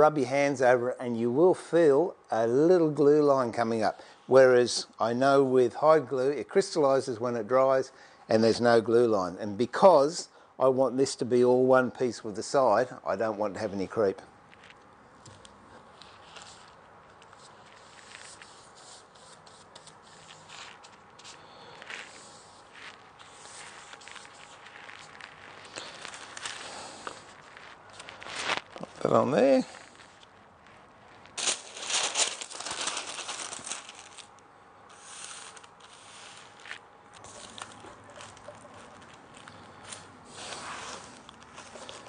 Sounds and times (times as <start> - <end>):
Speech: 0.0 - 14.3, 28.8 - 29.8
Inside, small room: 0.0 - 42.0.